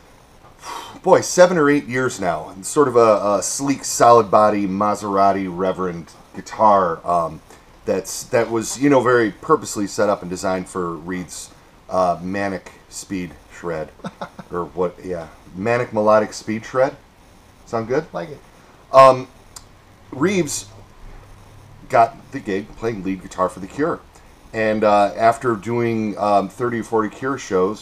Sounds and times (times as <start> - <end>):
Speech: 1.0 - 17.0, 17.7 - 19.3, 20.1 - 20.8, 21.9 - 27.8.